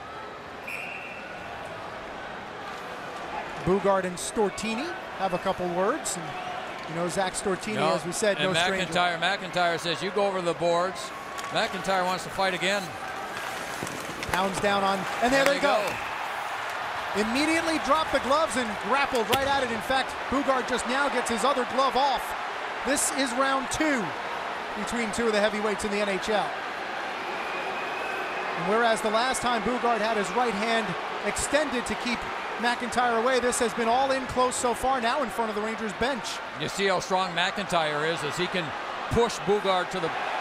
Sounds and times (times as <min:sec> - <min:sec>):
Speech: 0:17.2 - 0:22.3, 0:22.9 - 0:24.1, 0:24.8 - 0:26.5, 0:28.6 - 0:40.1.